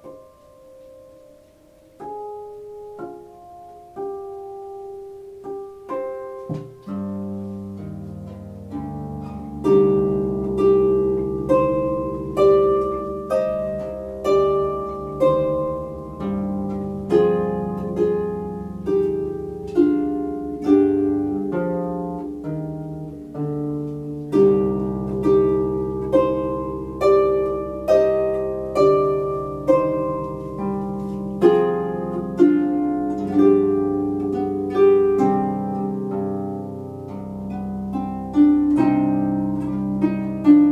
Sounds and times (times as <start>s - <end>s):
Bowed string instrument: 0.0s - 40.7s
Harp: 0.0s - 40.7s.